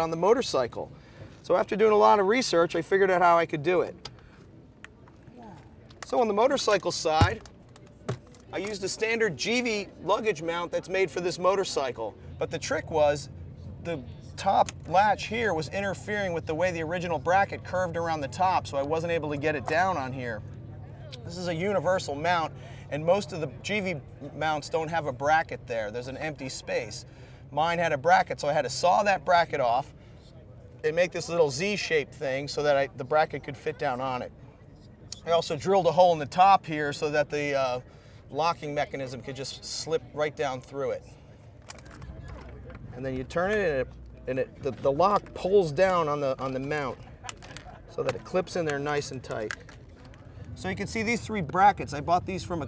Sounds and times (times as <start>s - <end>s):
Speech: 0.0s - 4.0s, 5.2s - 7.4s, 8.5s - 41.2s, 42.0s - 49.6s, 50.6s - 52.6s.